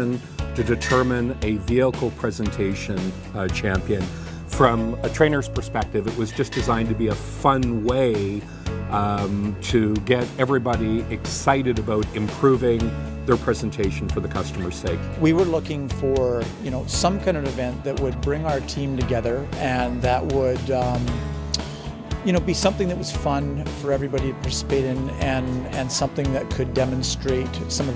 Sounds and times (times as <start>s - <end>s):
Speech: 0.0s - 21.2s, 22.2s - 27.9s
Music: 0.0s - 27.9s.